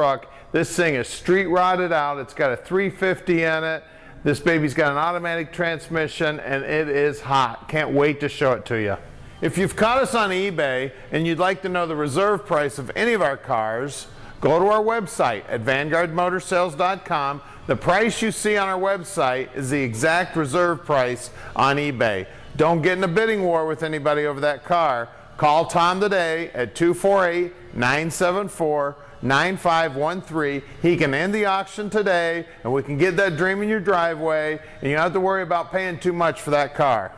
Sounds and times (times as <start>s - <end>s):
Speech: 0.0s - 37.1s.